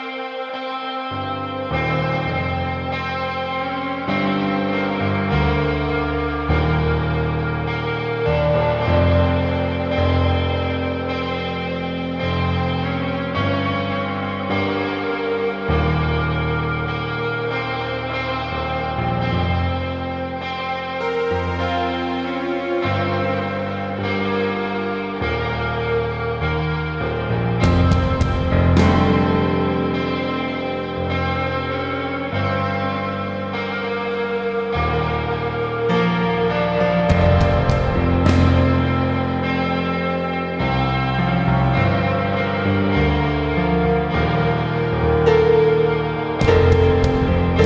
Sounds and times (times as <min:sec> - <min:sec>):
Music: 0:00.0 - 0:47.6.